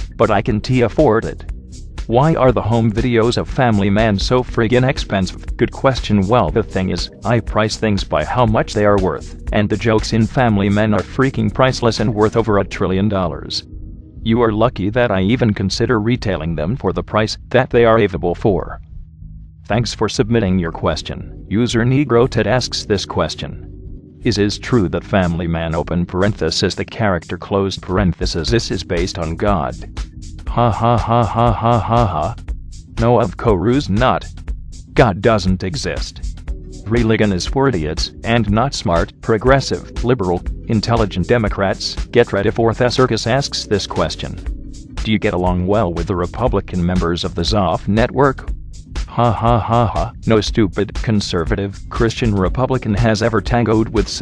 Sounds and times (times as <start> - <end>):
Music: 0.0 - 54.2
Speech: 0.2 - 1.5, 2.1 - 13.6, 14.2 - 18.8, 19.7 - 23.6, 24.2 - 29.9, 30.5 - 32.4, 33.0 - 34.3, 35.0 - 48.5, 49.1 - 54.2.